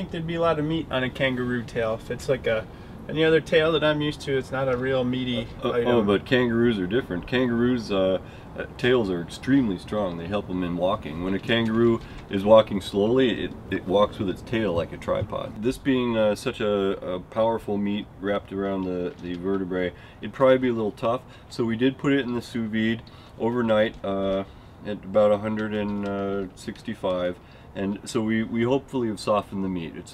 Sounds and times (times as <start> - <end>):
Speech: 0.0 - 30.1.